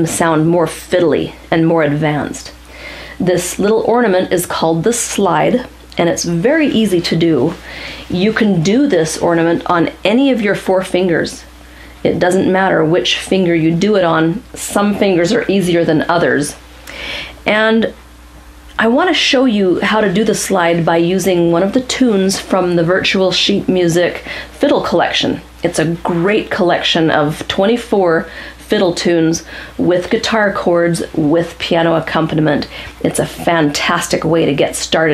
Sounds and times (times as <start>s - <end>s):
Speech: 0.0s - 2.6s, 3.2s - 16.6s, 17.4s - 18.0s, 18.8s - 35.1s.